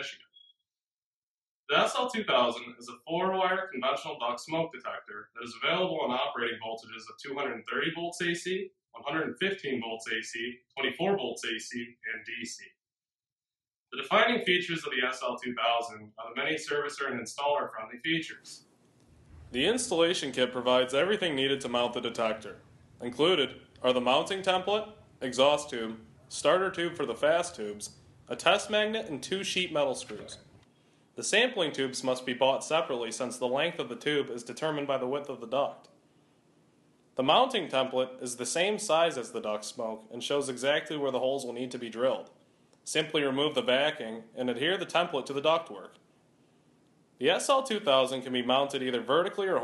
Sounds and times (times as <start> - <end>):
Speech: 0.0 - 0.4, 1.7 - 12.8, 14.0 - 18.7, 19.5 - 30.5, 31.2 - 36.0, 37.2 - 46.0, 47.2 - 49.6.